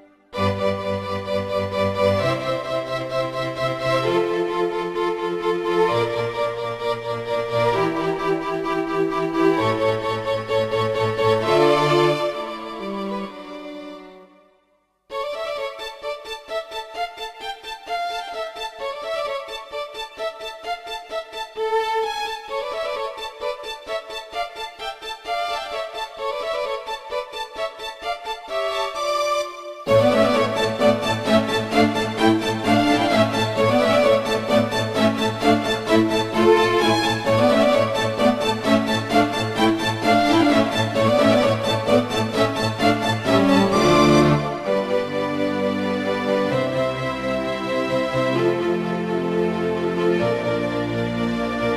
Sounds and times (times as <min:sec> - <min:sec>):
Violin, fiddle: 0:00.0 - 0:14.5, 0:15.1 - 0:51.7.